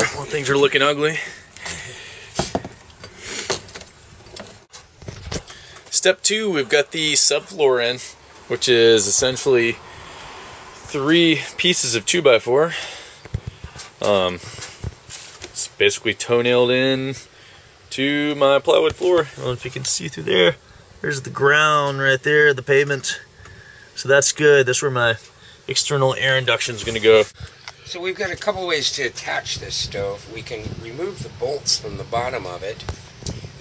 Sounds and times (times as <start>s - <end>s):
Speech: 0.0s - 1.4s, 5.9s - 9.8s, 10.8s - 12.8s, 14.0s - 14.5s, 15.6s - 17.3s, 17.9s - 23.2s, 24.0s - 32.9s.